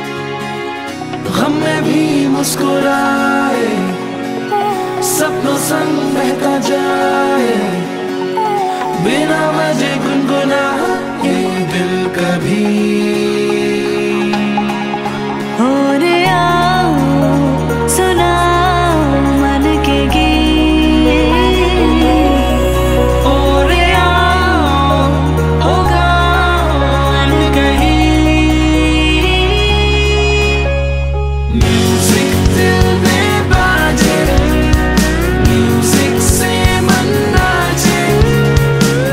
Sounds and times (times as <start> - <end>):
Happy music: 0.0 - 39.1
Theme music: 0.0 - 39.1.